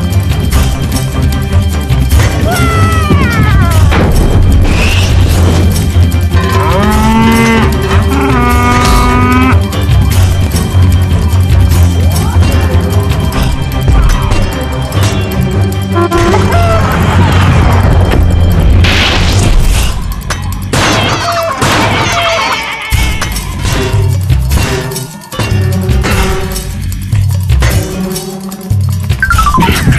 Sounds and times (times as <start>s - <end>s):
Music: 0.0s - 29.9s.